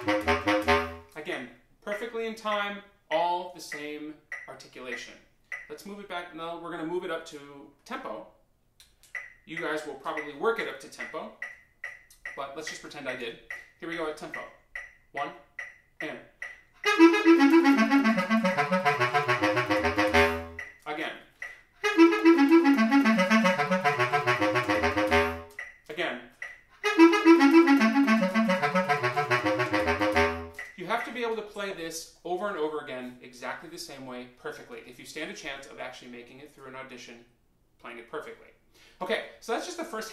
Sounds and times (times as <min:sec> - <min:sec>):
Clarinet: 0:00.0 - 0:01.2, 0:16.8 - 0:20.6, 0:21.8 - 0:25.6, 0:26.8 - 0:30.7
Inside, small room: 0:00.0 - 0:40.1
Speech: 0:01.2 - 0:08.4, 0:09.5 - 0:11.4, 0:12.3 - 0:14.6, 0:15.2 - 0:16.4, 0:20.8 - 0:21.3, 0:25.9 - 0:26.4, 0:30.8 - 0:40.1.